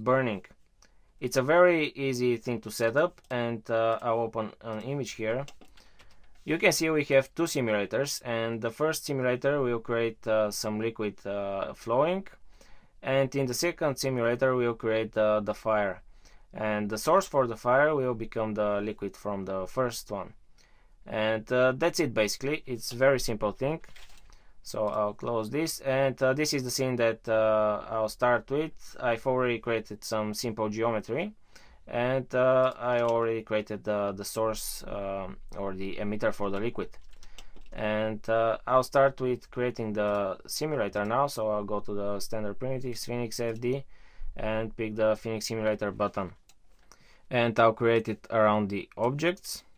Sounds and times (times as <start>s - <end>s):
Speech: 0.0s - 0.5s, 1.2s - 5.5s, 6.5s - 12.4s, 13.0s - 16.0s, 16.6s - 20.4s, 21.1s - 23.9s, 24.7s - 37.0s, 37.8s - 46.4s, 47.3s - 49.7s.